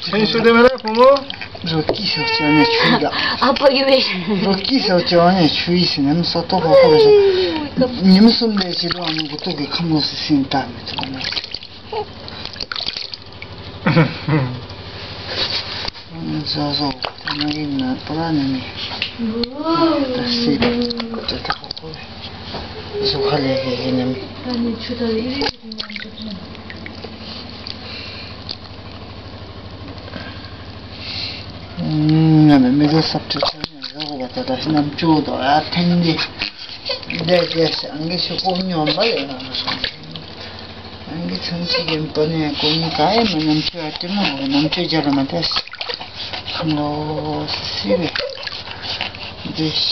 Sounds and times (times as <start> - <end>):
Inside, small room: 0.0 - 49.9
Speech: 37.1 - 40.0, 41.1 - 45.6.